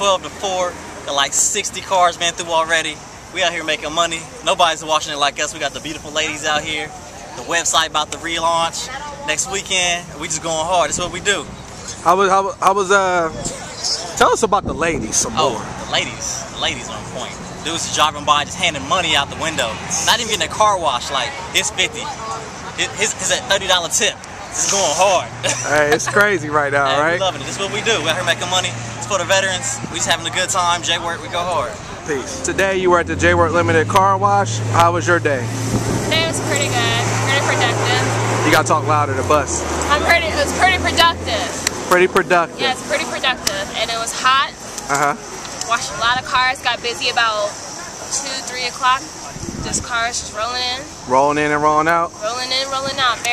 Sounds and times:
Car: 0.0 - 53.3
Speech: 24.6 - 28.8, 49.7 - 53.3.

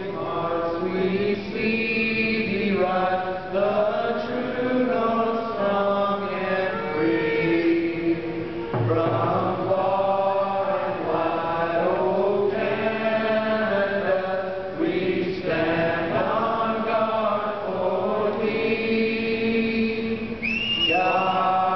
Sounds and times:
Male singing: 0.0 - 21.7.

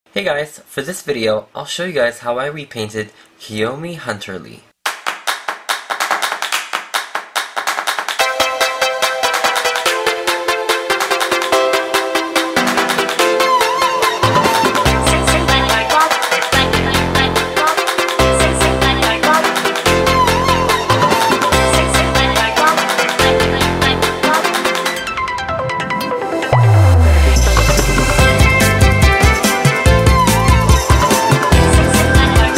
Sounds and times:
Speech: 0.1 - 4.7
Music: 5.9 - 32.5.

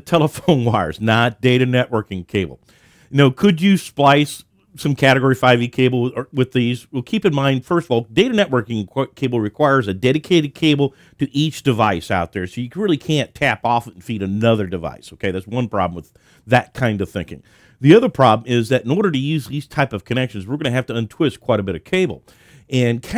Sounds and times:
Speech: 0.0 - 23.1.

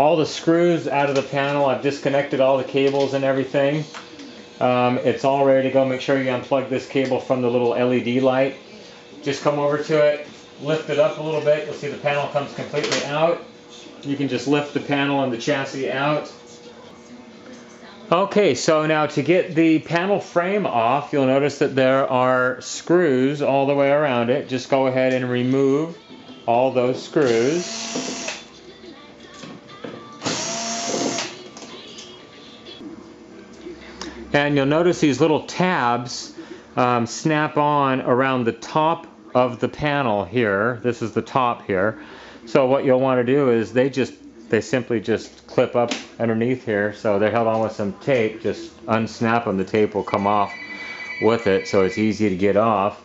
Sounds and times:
Speech: 0.0 - 4.0, 4.6 - 27.6, 34.0 - 50.6, 51.2 - 53.0
Music: 0.0 - 19.2, 23.4 - 36.8.

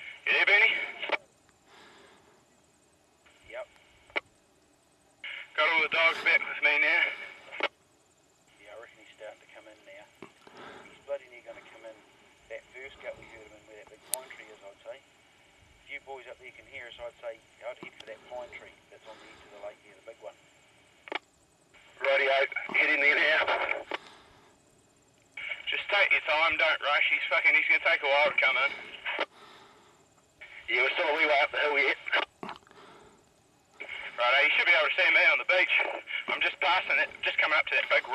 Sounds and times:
Speech: 0.2 - 1.3, 5.4 - 7.3, 8.6 - 10.1, 10.9 - 15.0, 15.9 - 20.4, 22.0 - 23.9, 25.4 - 29.0, 30.4 - 32.3, 33.8 - 38.1.

